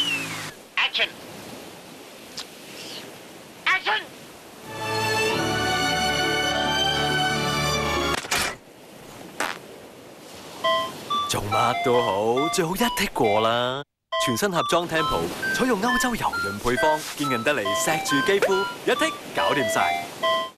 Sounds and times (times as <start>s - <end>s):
Speech: 11.3s - 20.0s.